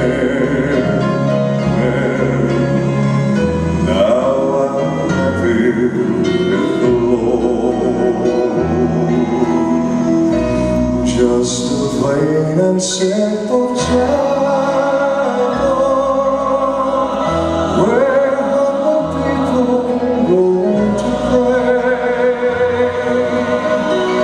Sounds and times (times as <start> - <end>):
Music: 0.0 - 24.2.